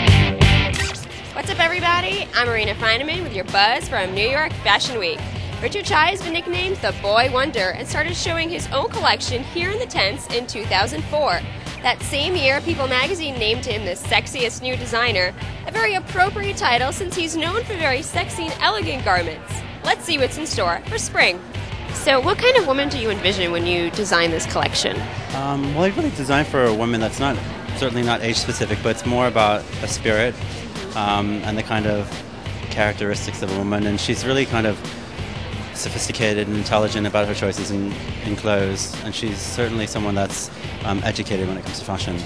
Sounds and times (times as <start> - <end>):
Music: 0.0 - 42.2.